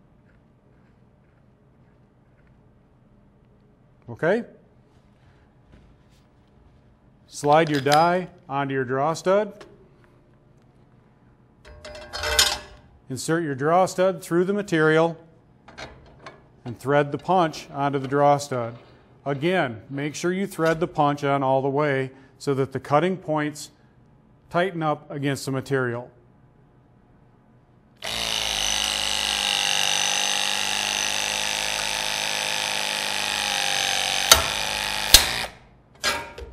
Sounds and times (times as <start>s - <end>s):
Speech: 4.0s - 4.6s, 7.3s - 9.6s, 13.1s - 15.2s, 16.7s - 23.8s, 24.5s - 26.2s
Power tool: 28.0s - 35.7s.